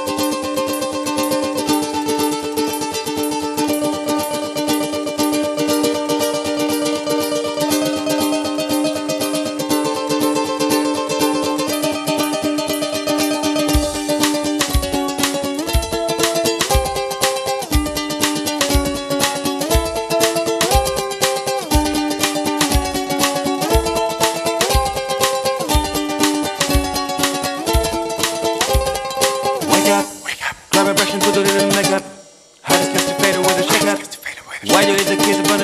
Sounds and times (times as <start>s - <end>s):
Music: 0.0s - 35.6s.